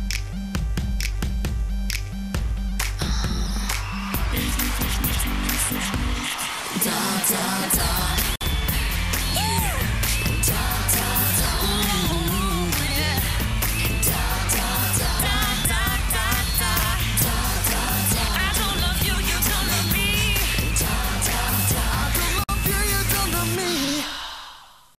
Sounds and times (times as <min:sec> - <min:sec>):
Music: 0:00.0 - 0:24.4.